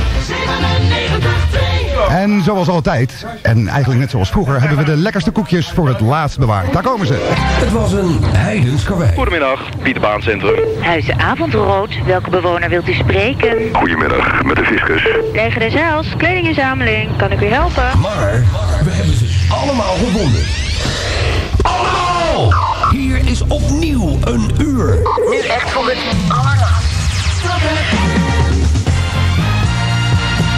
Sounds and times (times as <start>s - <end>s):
Radio: 2.1s - 28.2s.